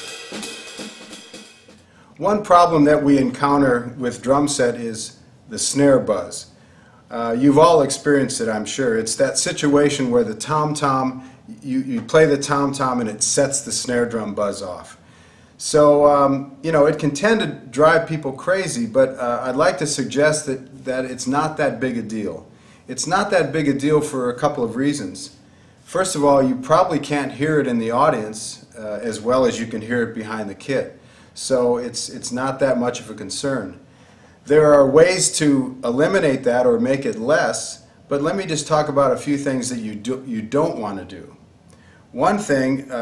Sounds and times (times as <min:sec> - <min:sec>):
Speech: 0:02.2 - 0:06.5, 0:07.1 - 0:15.0, 0:15.6 - 0:33.8, 0:34.5 - 0:41.4, 0:42.1 - 0:43.0.